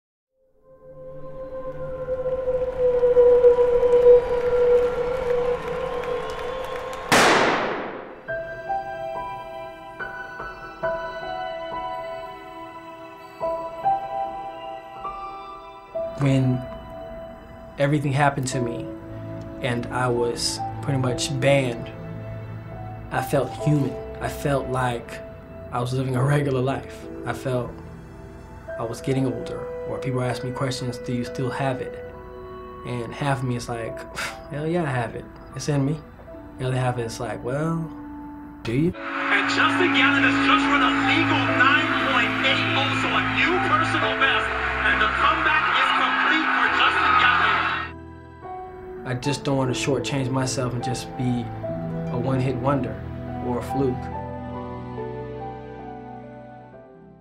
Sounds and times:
Music: 0.4s - 57.2s
Male speech, man speaking: 16.2s - 16.7s, 17.8s - 18.9s, 19.6s - 22.0s, 23.1s - 27.8s, 28.8s - 32.0s, 32.8s - 36.0s, 36.6s - 38.0s, 38.7s - 47.9s, 49.0s - 51.5s, 52.1s - 54.1s.

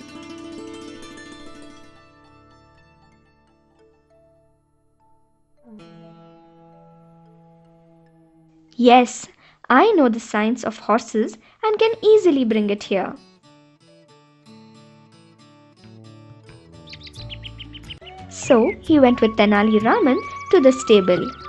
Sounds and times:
Child speech, kid speaking: 8.8s - 13.2s, 18.3s - 21.4s.

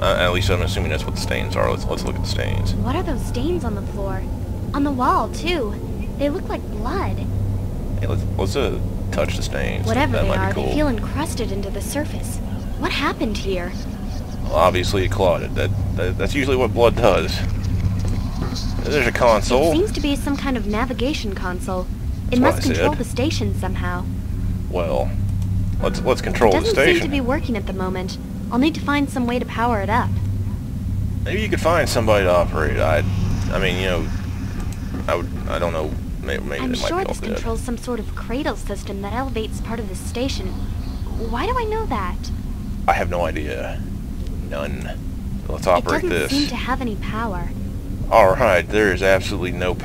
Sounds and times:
Speech: 0.0s - 7.3s, 8.0s - 24.1s, 24.7s - 25.2s, 25.8s - 30.1s, 31.3s - 34.1s, 35.1s - 42.3s, 42.9s - 43.8s, 44.5s - 49.8s
Inside, small room: 0.0s - 49.8s.

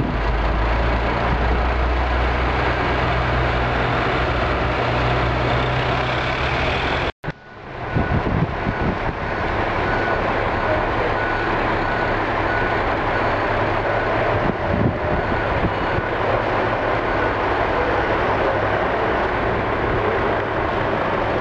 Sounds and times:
Vehicle: 0.0s - 21.4s.

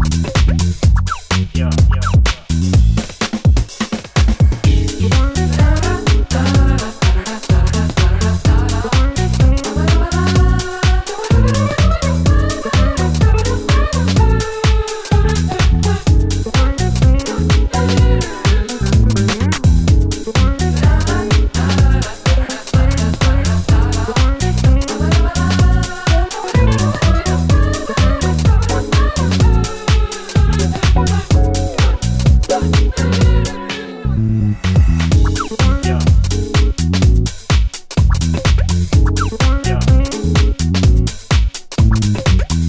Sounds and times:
Disco: 0.0s - 42.6s
Jazz: 0.0s - 42.6s.

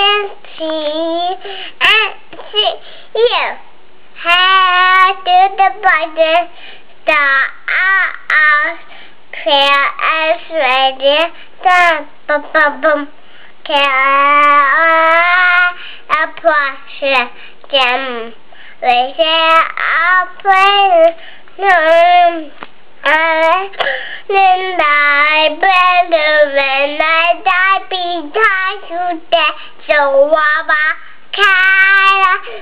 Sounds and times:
Speech: 1.9s - 3.7s, 12.3s - 13.1s.

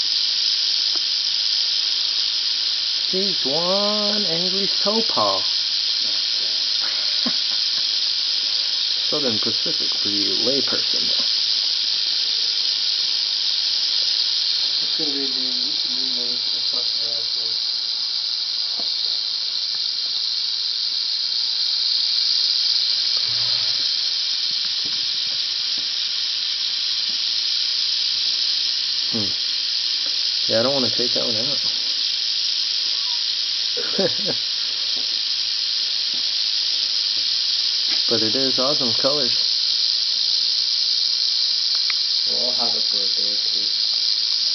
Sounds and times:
Snake: 0.0s - 44.5s
Speech: 3.1s - 5.5s, 9.1s - 11.2s, 14.8s - 17.6s, 30.5s - 31.7s, 38.1s - 39.4s, 42.3s - 43.7s.

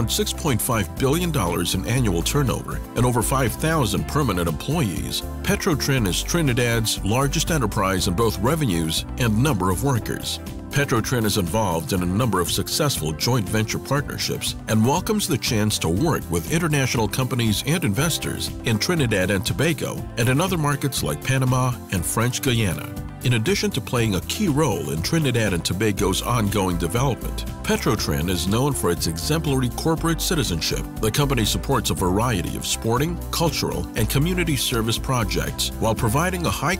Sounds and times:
Music: 0.0s - 36.7s
Speech: 0.0s - 36.7s.

